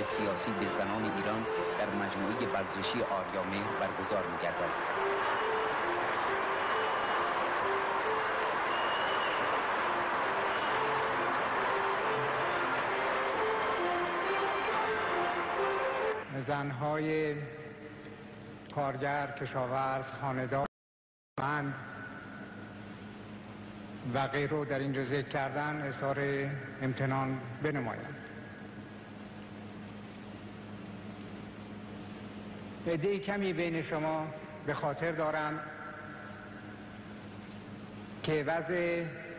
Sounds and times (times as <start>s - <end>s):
Male speech, man speaking: 0.0s - 4.7s, 16.3s - 17.5s, 18.8s - 20.7s, 21.4s - 21.9s, 24.1s - 28.2s, 32.9s - 35.7s, 38.3s - 39.2s
Narration, monologue: 0.0s - 4.7s, 16.2s - 20.7s, 21.4s - 39.3s
Music: 0.0s - 16.4s.